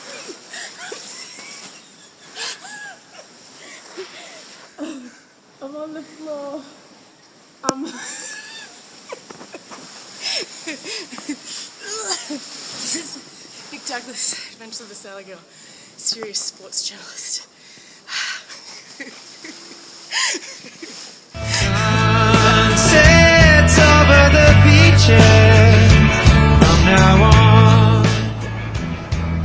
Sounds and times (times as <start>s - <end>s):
Speech: 5.6s - 6.8s, 13.8s - 17.5s.